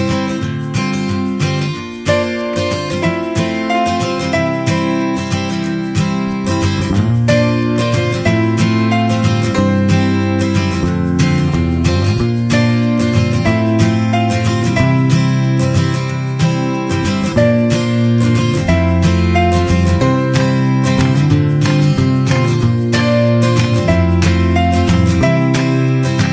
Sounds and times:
Acoustic guitar: 0:00.0 - 0:26.3.

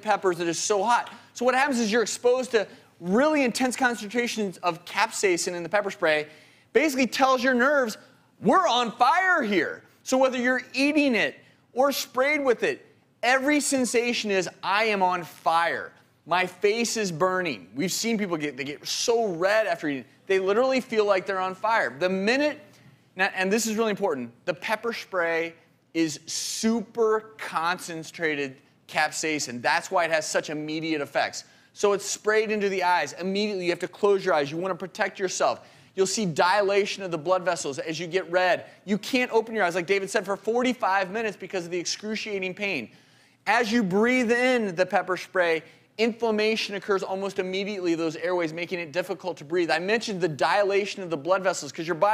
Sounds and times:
Speech: 0:00.0 - 0:52.1.

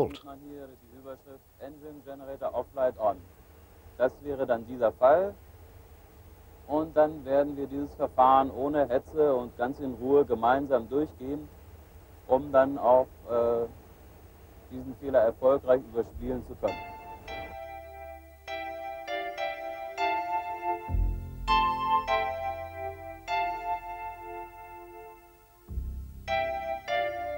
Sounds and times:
Speech: 0:00.0 - 0:03.3, 0:04.0 - 0:05.4, 0:06.7 - 0:11.5, 0:12.3 - 0:13.8, 0:14.7 - 0:16.8
Music: 0:16.1 - 0:27.3.

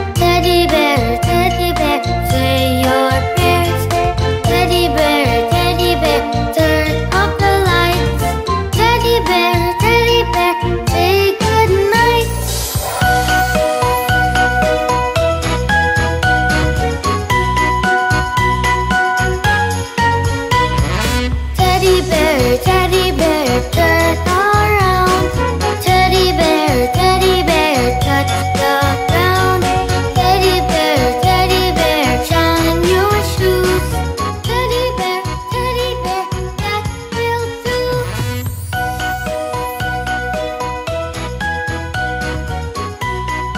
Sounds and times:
Music: 0:00.0 - 0:43.5.

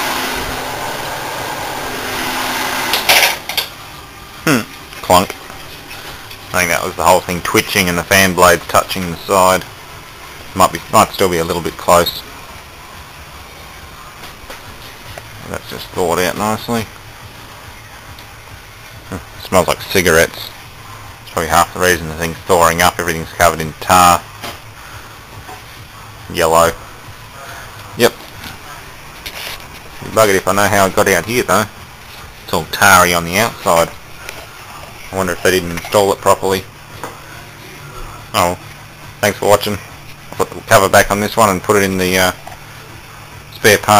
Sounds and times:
Speech: 0:04.5 - 0:05.3, 0:06.5 - 0:09.6, 0:10.6 - 0:12.2, 0:15.4 - 0:16.9, 0:19.1 - 0:20.6, 0:21.3 - 0:24.2, 0:26.3 - 0:26.8, 0:30.0 - 0:31.7, 0:32.5 - 0:34.0, 0:35.1 - 0:36.7, 0:37.8 - 0:38.6, 0:39.2 - 0:39.8, 0:40.4 - 0:42.4, 0:43.5 - 0:43.9.

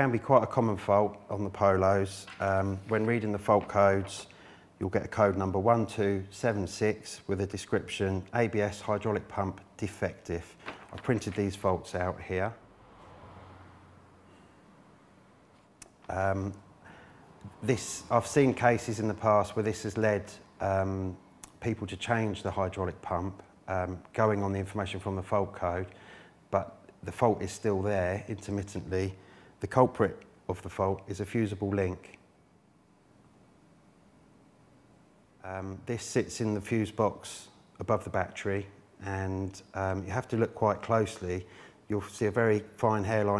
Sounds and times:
Speech: 0:00.0 - 0:12.6, 0:16.1 - 0:16.6, 0:17.5 - 0:32.2, 0:35.4 - 0:43.3.

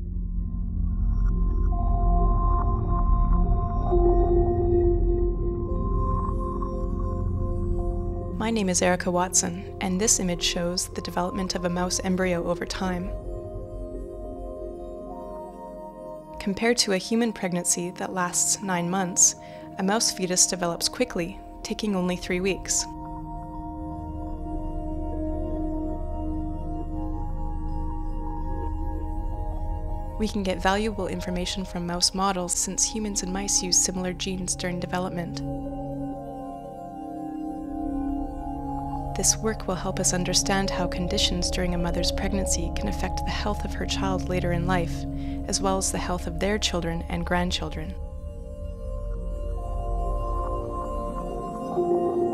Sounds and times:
Music: 0:00.0 - 0:52.3
Speech: 0:08.4 - 0:13.2, 0:16.4 - 0:22.9, 0:30.2 - 0:35.4, 0:39.2 - 0:48.0.

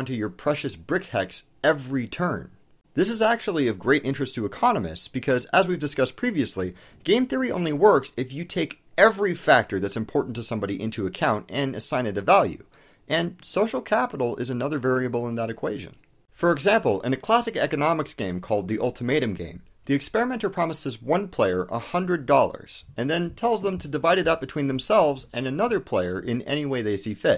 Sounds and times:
Speech: 0:00.0 - 0:27.3.

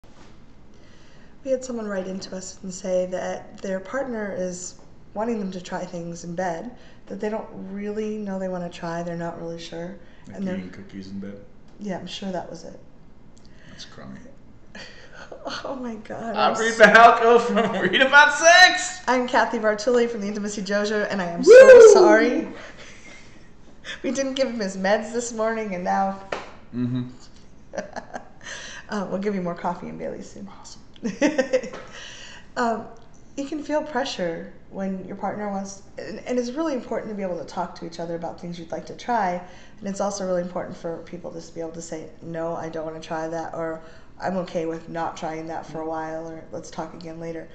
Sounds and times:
Speech: 0:01.5 - 0:12.8, 0:13.8 - 0:14.3, 0:15.3 - 0:22.6, 0:26.8 - 0:27.1, 0:32.6 - 0:47.5.

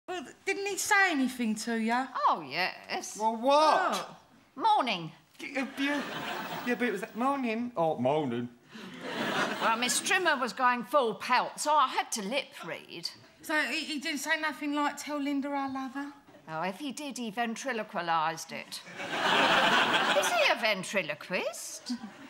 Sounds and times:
Laughter: 0:05.6 - 0:06.7, 0:08.8 - 0:10.0, 0:18.8 - 0:20.5, 0:21.8 - 0:22.2.

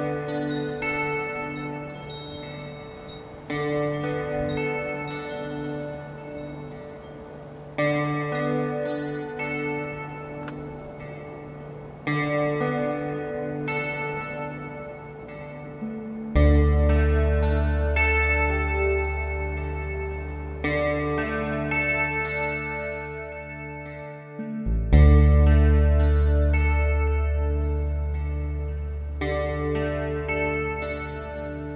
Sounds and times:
Music: 0:00.0 - 0:31.7.

